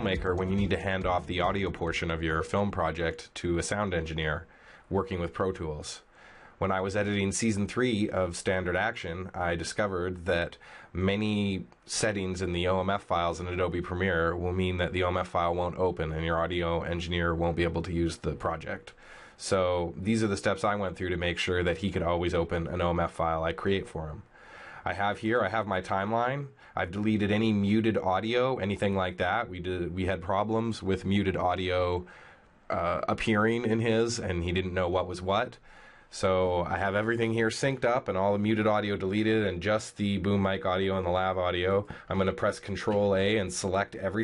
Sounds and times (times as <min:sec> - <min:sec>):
Speech: 0:00.0 - 0:32.1, 0:32.7 - 0:44.2.